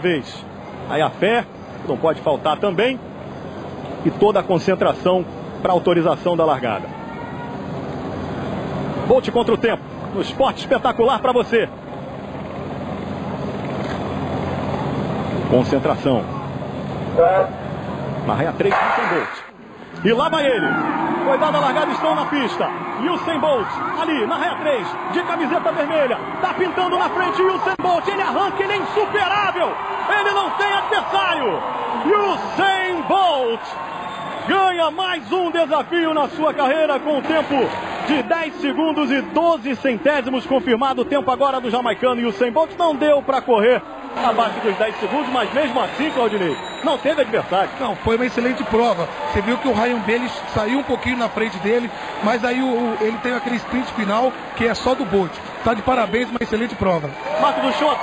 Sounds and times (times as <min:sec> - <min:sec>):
Outside, urban or manmade: 0:00.0 - 0:29.0
Speech: 0:21.3 - 0:33.7, 0:34.5 - 0:58.0.